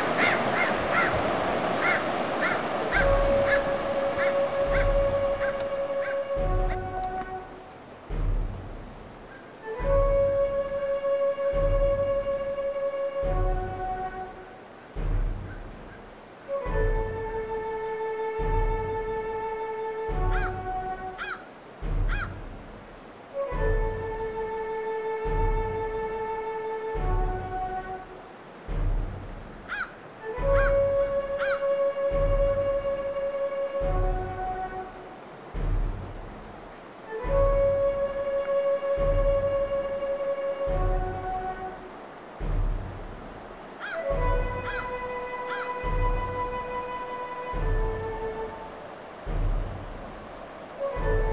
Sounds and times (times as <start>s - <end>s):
Music: 0.0s - 51.3s.